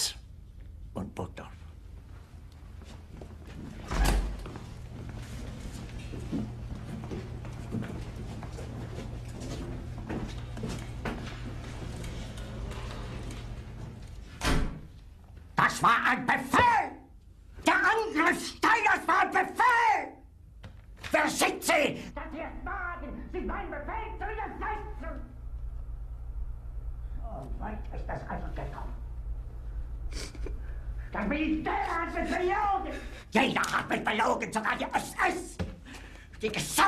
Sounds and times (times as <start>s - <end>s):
Speech: 0.0s - 0.2s, 0.9s - 1.6s, 15.6s - 20.2s, 21.1s - 25.4s, 27.2s - 29.0s, 31.2s - 35.7s, 36.4s - 36.8s.